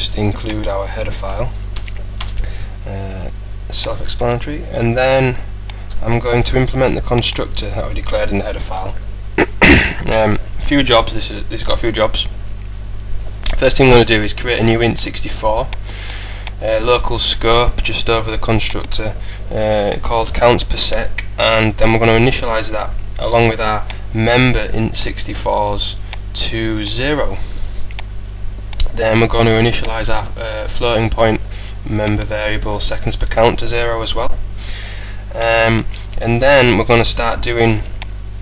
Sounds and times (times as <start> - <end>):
Speech: 0.0 - 1.6, 2.9 - 9.0, 10.0 - 12.4, 13.5 - 15.8, 16.6 - 27.6, 28.8 - 34.4, 35.3 - 37.9.